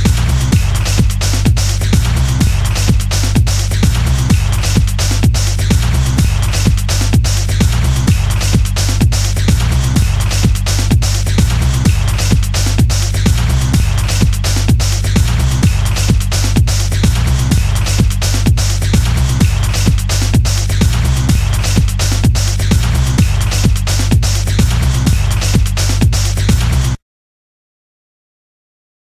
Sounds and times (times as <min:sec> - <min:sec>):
Exciting music: 0:00.0 - 0:27.0.